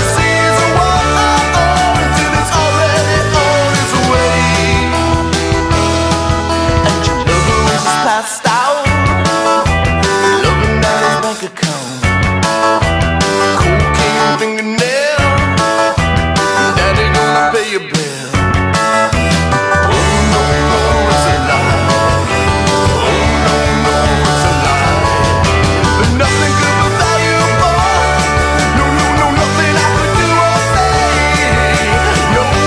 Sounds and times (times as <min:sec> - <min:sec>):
Male singing: 0:00.0 - 0:05.1, 0:06.8 - 0:09.0, 0:10.3 - 0:12.1, 0:13.6 - 0:15.5, 0:16.6 - 0:18.4, 0:19.1 - 0:32.6
Music: 0:00.0 - 0:32.6.